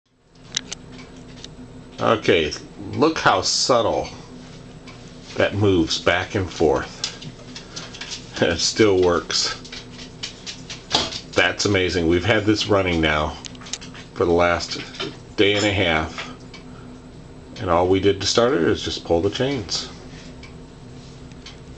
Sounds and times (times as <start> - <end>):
Speech: 2.0 - 4.2, 5.4 - 7.0, 8.4 - 9.7, 11.4 - 13.5, 14.2 - 16.4, 17.6 - 20.0.